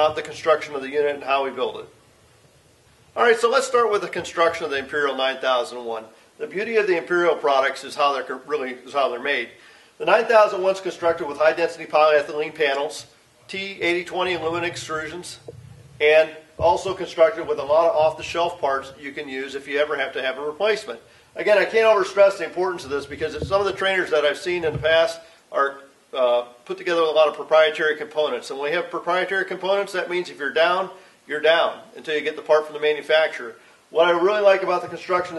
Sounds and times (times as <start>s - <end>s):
Speech: 0.0s - 1.9s, 3.2s - 35.3s.